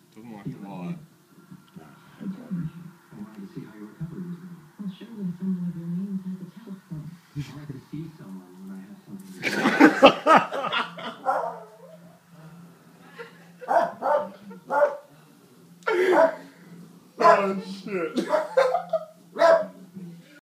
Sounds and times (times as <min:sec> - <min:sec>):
Bow-wow: 0:11.2 - 0:12.0, 0:13.7 - 0:15.0, 0:16.0 - 0:16.4, 0:17.2 - 0:17.6, 0:19.4 - 0:19.8.